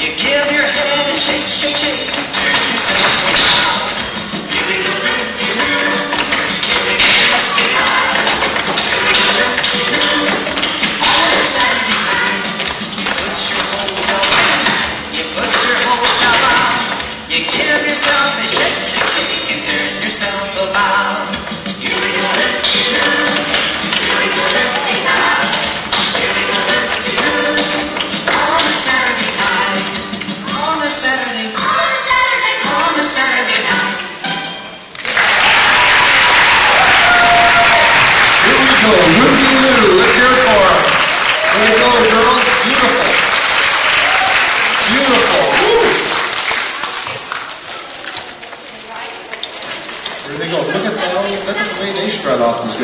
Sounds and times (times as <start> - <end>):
Applause: 35.0 - 47.8
Speech: 38.4 - 40.9.